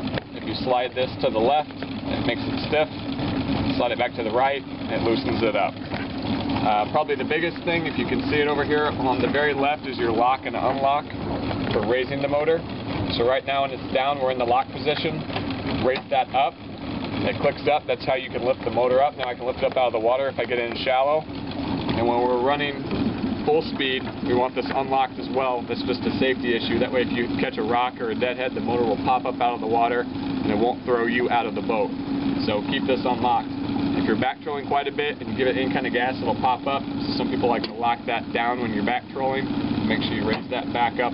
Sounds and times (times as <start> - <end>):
Motorboat, speedboat: 0.0 - 41.1.